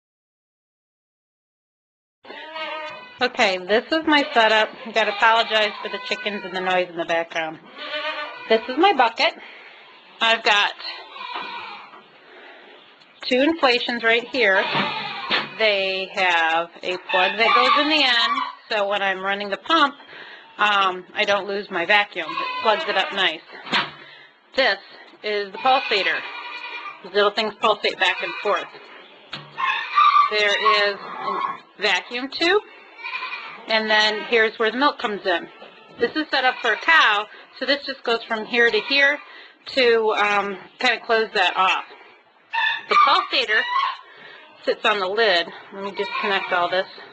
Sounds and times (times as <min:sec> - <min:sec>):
Bleat: 0:02.3 - 0:06.8, 0:07.6 - 0:09.1, 0:09.9 - 0:12.0, 0:14.2 - 0:15.6, 0:17.1 - 0:18.6, 0:22.2 - 0:23.4, 0:25.5 - 0:27.1, 0:27.8 - 0:28.8, 0:29.6 - 0:31.6, 0:32.7 - 0:34.5, 0:35.2 - 0:37.4, 0:38.6 - 0:39.2, 0:45.9 - 0:47.1
Speech: 0:03.2 - 0:07.6, 0:08.5 - 0:09.4, 0:10.2 - 0:11.0, 0:13.2 - 0:14.7, 0:15.6 - 0:20.0, 0:20.6 - 0:23.5, 0:24.6 - 0:26.2, 0:27.1 - 0:28.7, 0:30.3 - 0:32.6, 0:33.7 - 0:41.9, 0:42.9 - 0:43.7, 0:44.6 - 0:47.0.